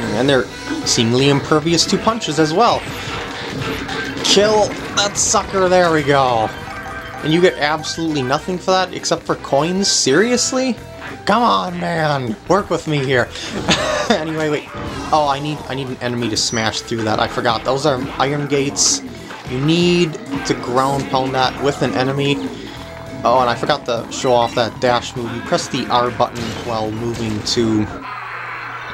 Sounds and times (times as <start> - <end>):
Speech: 0.0 - 2.9, 4.3 - 6.5, 7.3 - 13.4, 14.0 - 22.4, 23.2 - 28.0
Music: 0.0 - 28.0.